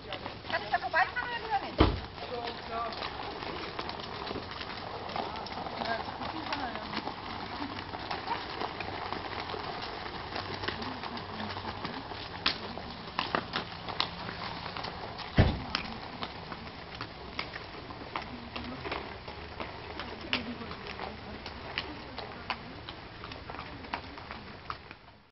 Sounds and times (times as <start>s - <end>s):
Speech: 0.0s - 3.0s, 5.2s - 7.8s, 10.6s - 13.1s, 19.8s - 24.6s
Clip-clop: 0.0s - 25.3s.